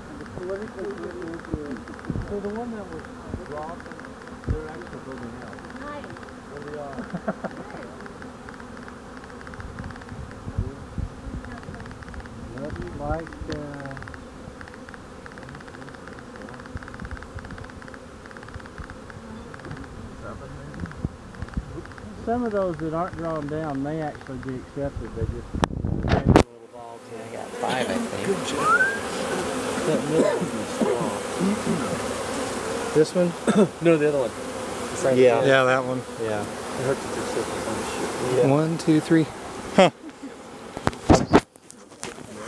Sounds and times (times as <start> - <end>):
Bee, wasp, etc.: 0.0 - 42.4.